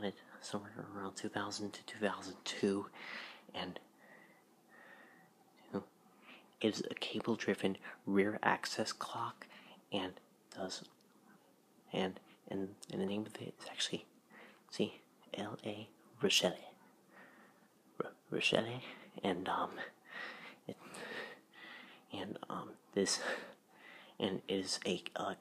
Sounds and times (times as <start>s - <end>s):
Speech: 0.0s - 2.9s, 3.5s - 3.9s, 6.6s - 11.0s, 11.9s - 14.1s, 14.7s - 16.8s, 18.0s - 19.9s, 22.1s - 23.5s, 24.2s - 25.4s.